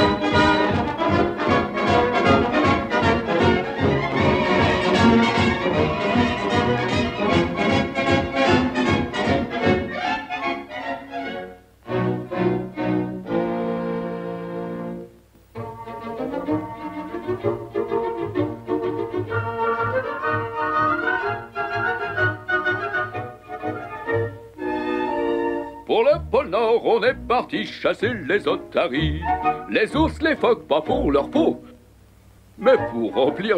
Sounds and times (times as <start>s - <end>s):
Music: 0.0s - 33.5s.